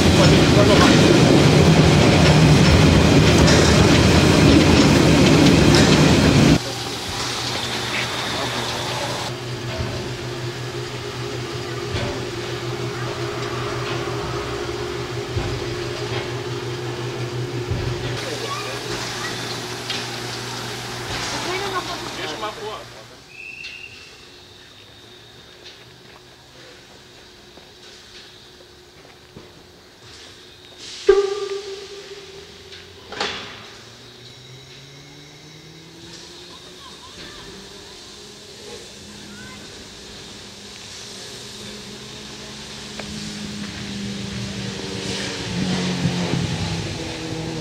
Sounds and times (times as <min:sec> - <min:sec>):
Train: 0:00.0 - 0:47.6.